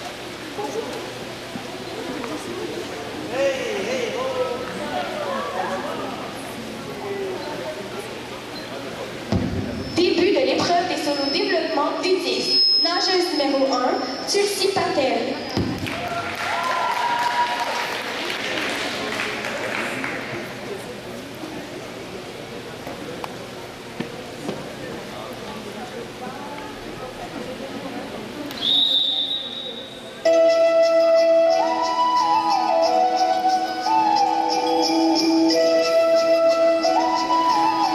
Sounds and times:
Speech: 0.5s - 9.3s, 18.2s - 28.6s.

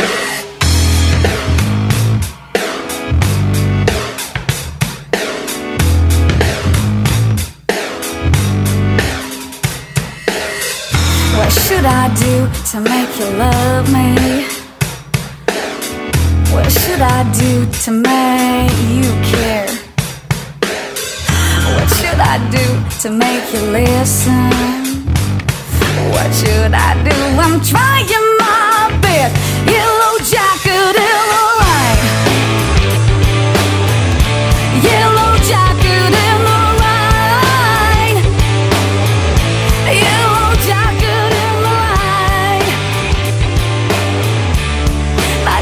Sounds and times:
Music: 0.0s - 45.6s.

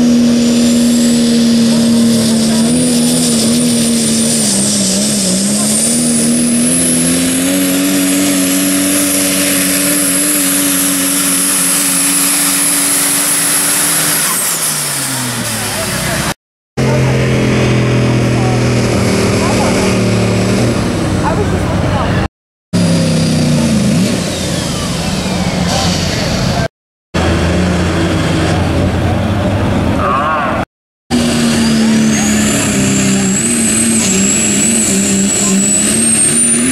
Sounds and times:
Vehicle: 0.0s - 36.7s
Speech: 15.5s - 17.2s, 19.3s - 19.9s, 21.2s - 22.3s.

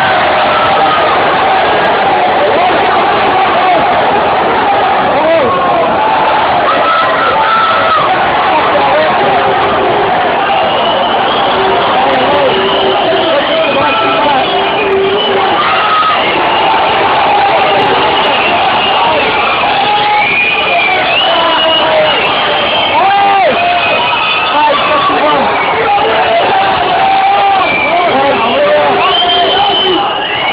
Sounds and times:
Speech: 4.9s - 5.7s, 6.7s - 9.8s, 11.8s - 15.7s, 24.5s - 30.1s.

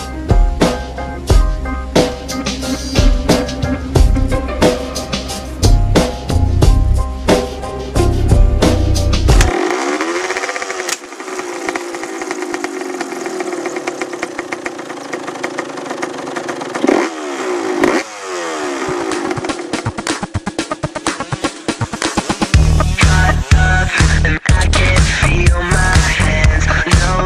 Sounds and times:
Motorcycle: 0.0s - 27.2s.

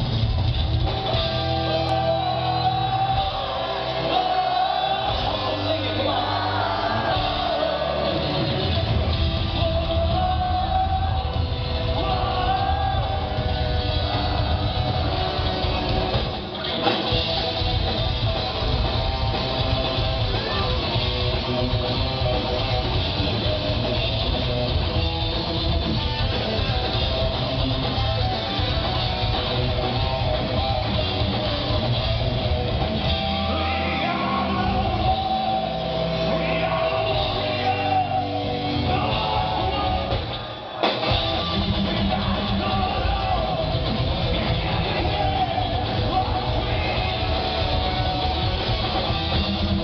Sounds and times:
Music: 0.0s - 49.8s.

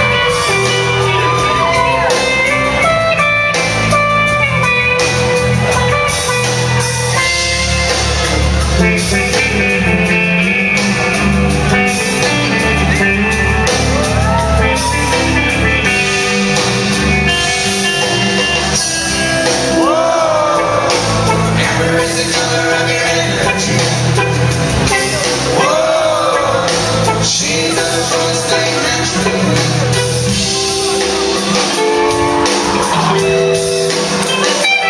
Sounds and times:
Inside, large room or hall: 0.0s - 34.8s
Music: 0.0s - 34.8s
Singing: 19.7s - 24.2s, 25.0s - 30.0s.

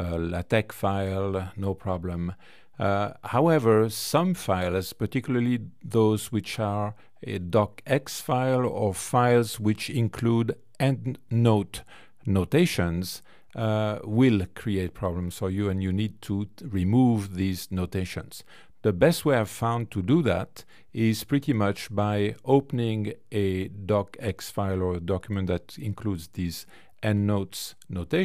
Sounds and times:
Speech: 0.0s - 28.2s.

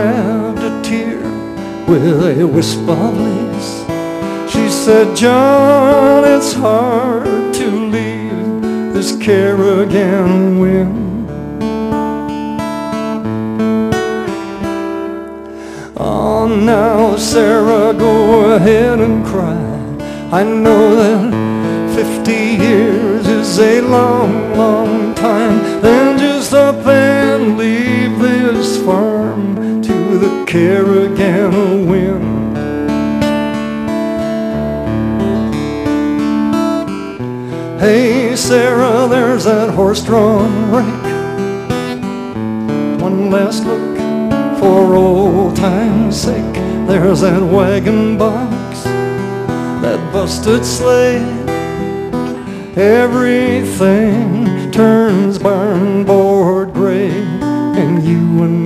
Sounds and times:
Music: 0.0s - 58.6s.

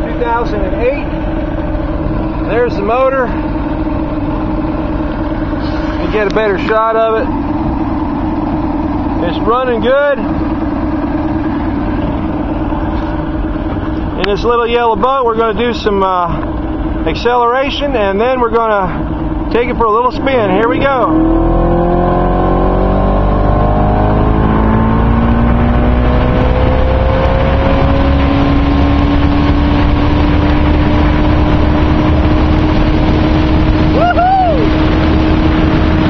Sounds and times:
Vehicle: 0.0s - 36.0s.

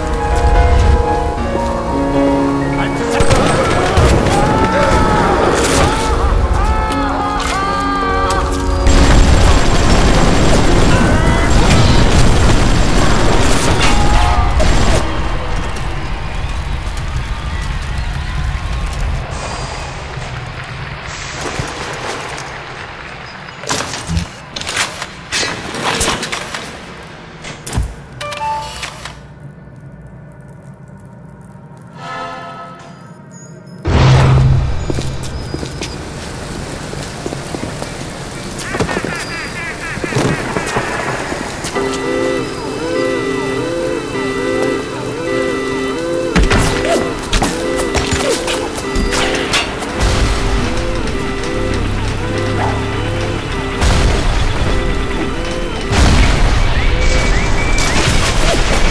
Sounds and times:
Music: 0.0s - 12.5s, 28.2s - 28.9s, 41.7s - 58.9s.

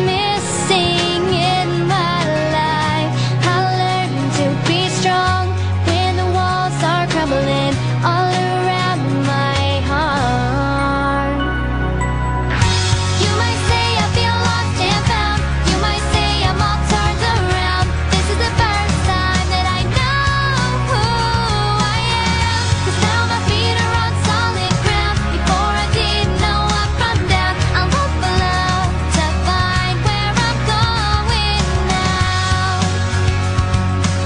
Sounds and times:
Music: 0.0s - 34.2s.

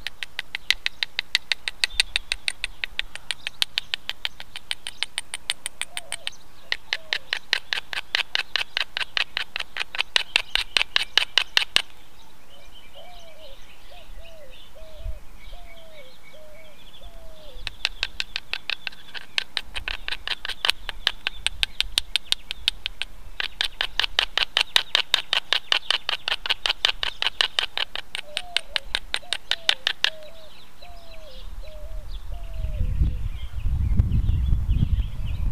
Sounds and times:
Bird: 0.0s - 35.5s.

